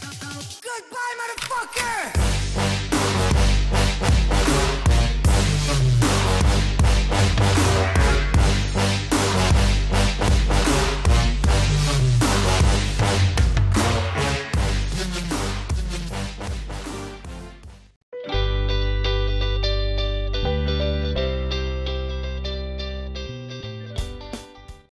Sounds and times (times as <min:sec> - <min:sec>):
Music: 0:00.0 - 0:00.7, 0:02.1 - 0:24.9.